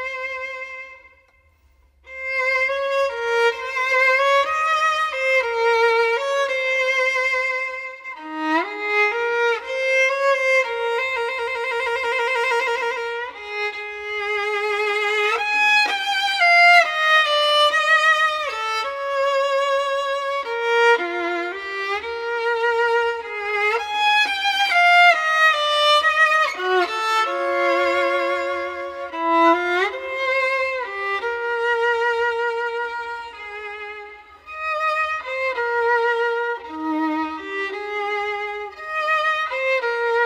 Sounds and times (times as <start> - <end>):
Violin, fiddle: 0.0 - 1.4, 2.0 - 40.2.